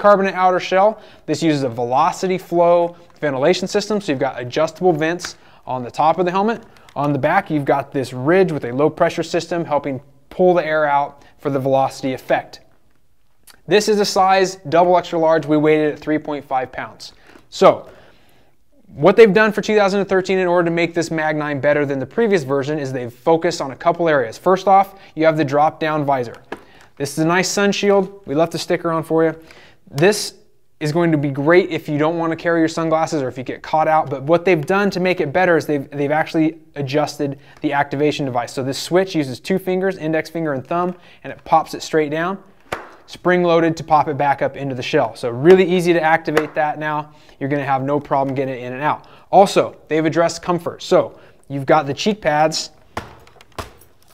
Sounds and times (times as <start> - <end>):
Speech: 0.0 - 12.7, 13.5 - 17.9, 18.8 - 26.4, 27.0 - 42.5, 43.1 - 52.8.